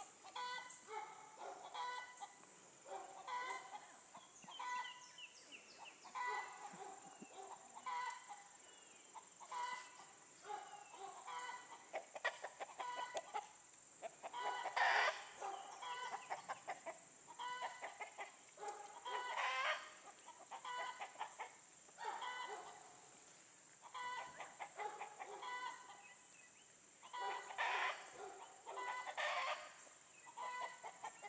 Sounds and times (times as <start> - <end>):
Livestock, farm animals, working animals: 0.0 - 31.2.